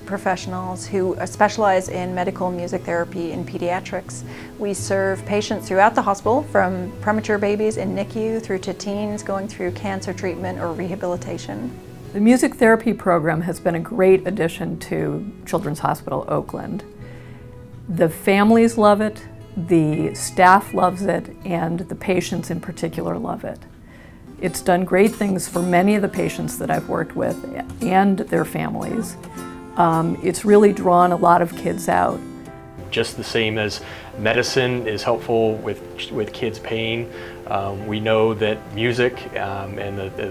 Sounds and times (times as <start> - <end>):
Speech: 0.0 - 16.8, 17.9 - 23.6, 24.4 - 29.2, 29.8 - 32.1, 33.0 - 40.3
Music: 0.0 - 40.3.